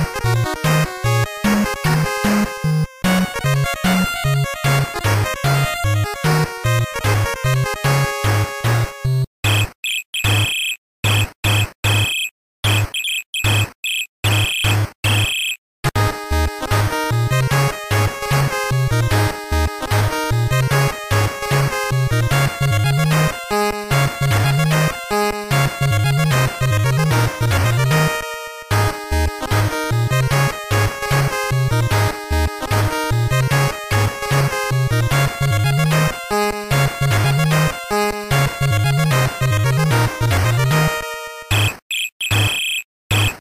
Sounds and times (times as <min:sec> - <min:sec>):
Funny music: 0:00.0 - 0:09.3, 0:15.9 - 0:41.7.